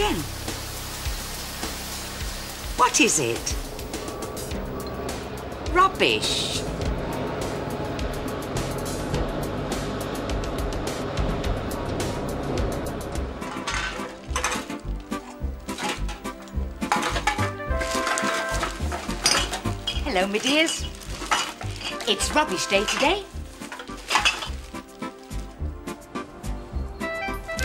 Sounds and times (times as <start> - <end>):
Speech: 0.0 - 0.3, 2.8 - 3.6, 5.7 - 6.7, 20.0 - 20.9, 22.0 - 23.3
Music: 0.0 - 27.6.